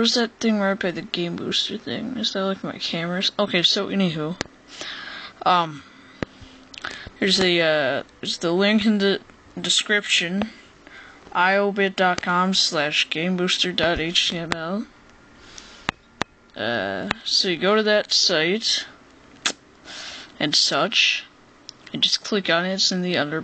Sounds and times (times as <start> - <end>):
Speech: 0.0 - 4.5, 5.4 - 5.8, 7.2 - 10.6, 11.3 - 14.9, 16.6 - 19.0, 20.4 - 21.3, 21.9 - 23.4.